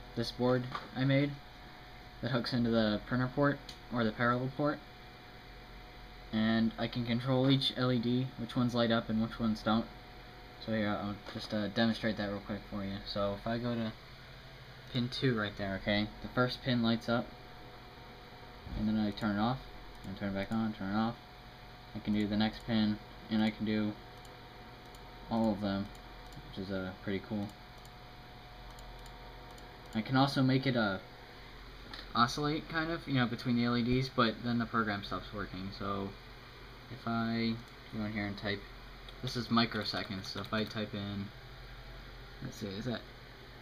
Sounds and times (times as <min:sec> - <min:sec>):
Speech: 0:00.2 - 0:01.4, 0:02.2 - 0:04.9, 0:06.3 - 0:09.9, 0:10.6 - 0:14.0, 0:14.9 - 0:17.3, 0:18.7 - 0:21.2, 0:21.9 - 0:24.0, 0:25.3 - 0:27.6, 0:30.0 - 0:31.1, 0:32.1 - 0:36.2, 0:36.9 - 0:41.4, 0:42.4 - 0:43.1.